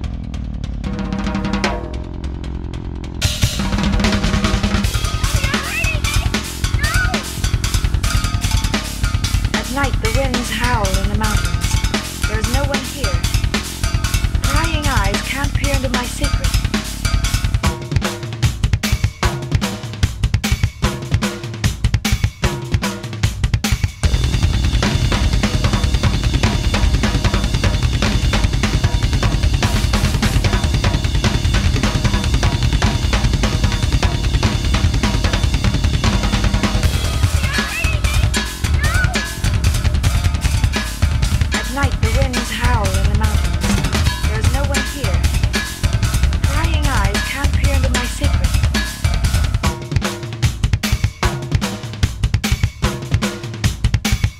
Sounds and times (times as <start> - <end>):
Bass drum: 0.0 - 54.3
Drum kit: 0.0 - 54.3.